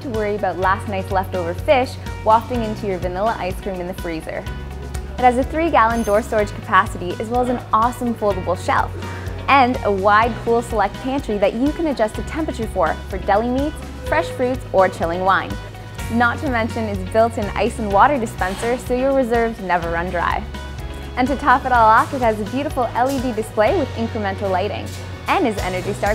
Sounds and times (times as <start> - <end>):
Speech: 0.0 - 4.4, 5.2 - 8.9, 9.5 - 20.5, 21.2 - 26.1
Music: 0.0 - 26.1.